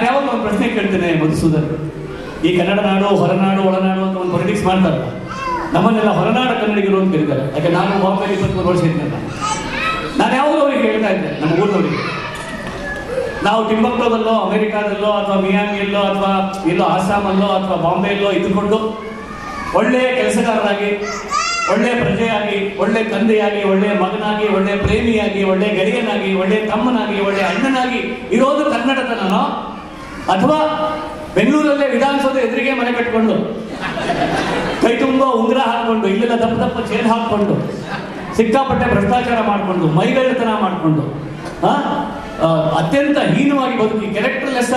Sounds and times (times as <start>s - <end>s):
Male speech, man speaking: 0.0s - 1.8s, 2.4s - 9.3s, 10.2s - 12.2s, 13.4s - 19.0s, 19.8s - 21.0s, 21.7s - 29.7s, 30.3s - 33.6s, 34.8s - 37.8s, 38.4s - 44.7s
Narration, monologue: 0.0s - 44.7s.